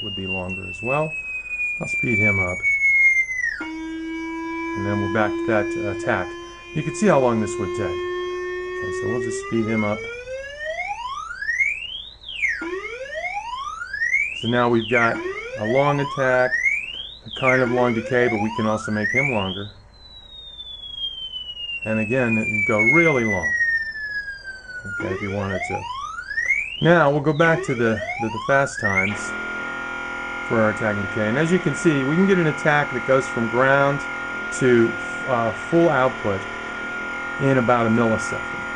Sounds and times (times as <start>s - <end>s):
Speech: 0.0s - 1.1s, 1.8s - 2.6s, 4.8s - 8.0s, 8.8s - 10.1s, 14.4s - 16.5s, 17.3s - 19.7s, 21.9s - 23.6s, 24.9s - 25.9s, 26.8s - 29.3s, 30.5s - 36.4s, 37.4s - 38.6s.